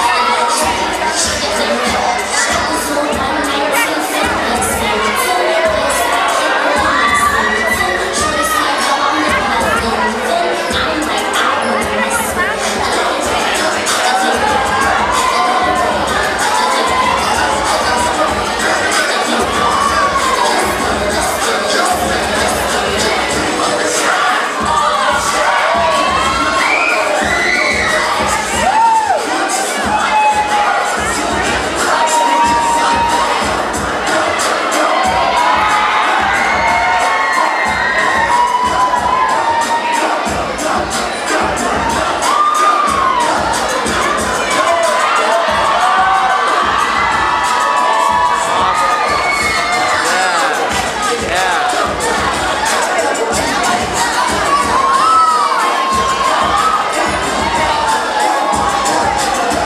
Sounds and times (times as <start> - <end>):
Speech: 0.0 - 28.5, 49.8 - 59.6
Music: 0.0 - 59.6.